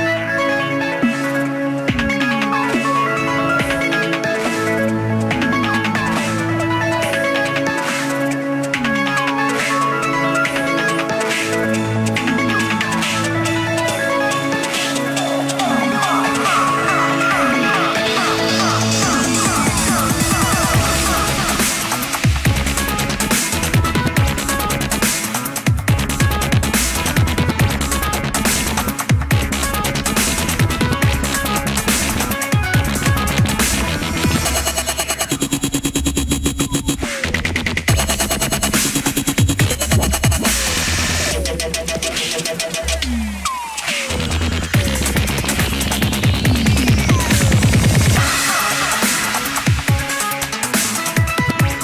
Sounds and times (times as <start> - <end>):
Music: 0.0 - 51.8.